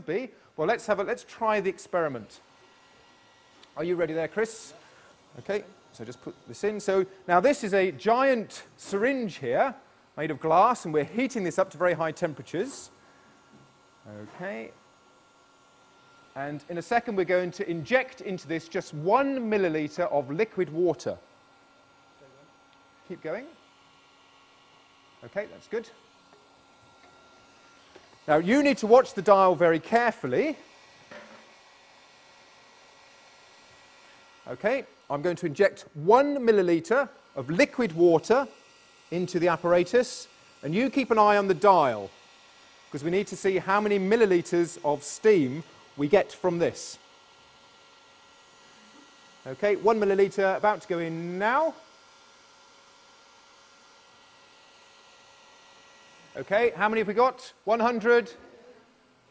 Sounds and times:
Speech: 0.0s - 2.4s, 3.8s - 4.8s, 5.4s - 12.9s, 14.1s - 14.8s, 16.4s - 21.2s, 23.1s - 23.6s, 25.2s - 26.0s, 28.3s - 30.6s, 34.5s - 42.1s, 43.0s - 47.0s, 49.4s - 51.8s, 56.3s - 58.8s.

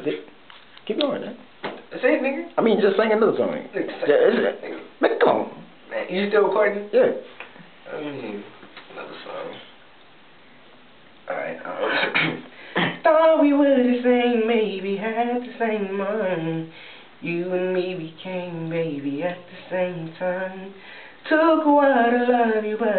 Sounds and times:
Speech: 0.9s - 9.8s.

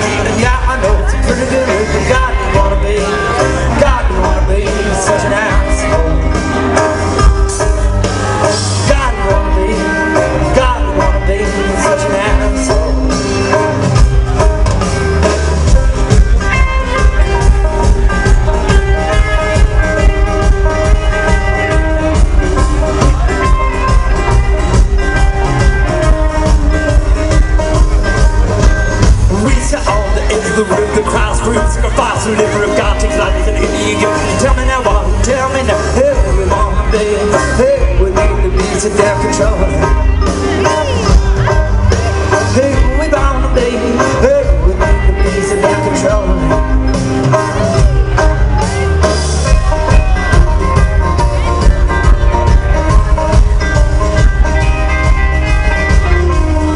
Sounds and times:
Music: 0.0s - 56.7s.

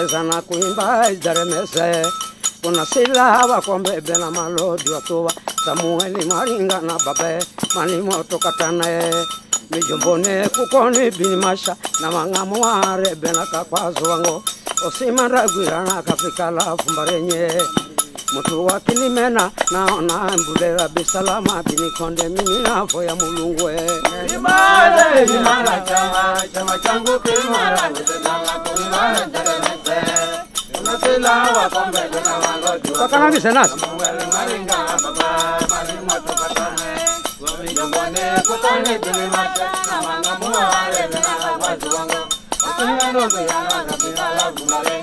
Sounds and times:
Male singing: 0.0s - 45.0s
Music: 0.0s - 45.0s.

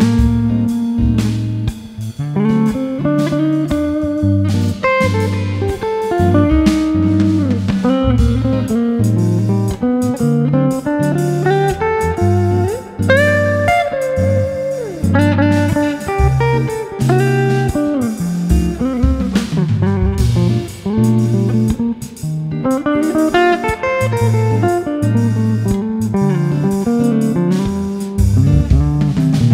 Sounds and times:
Steel guitar, slide guitar: 0.0s - 29.5s.

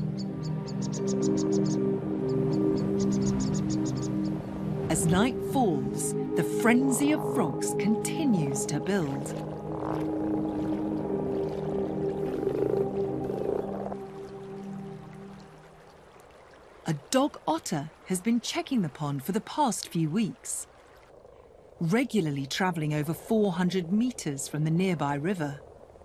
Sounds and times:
Frog: 0.8s - 1.8s, 2.5s - 4.3s, 9.2s - 10.8s, 12.3s - 15.1s, 20.9s - 26.0s.

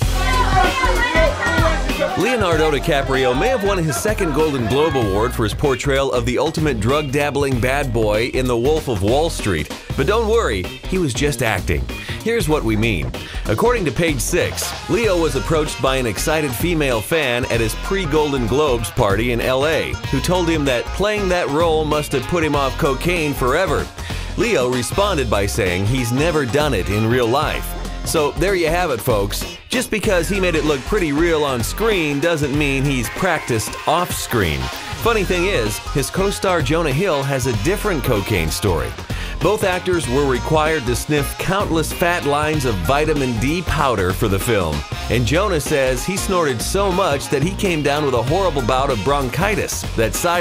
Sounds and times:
Music: 0.0s - 50.4s
Speech: 0.1s - 50.4s.

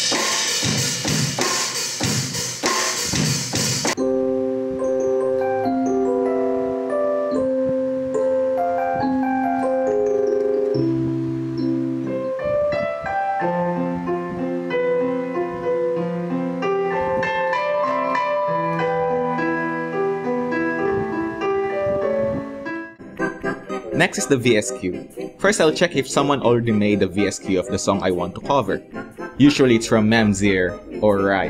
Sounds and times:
Electronic organ: 3.6s - 31.4s.

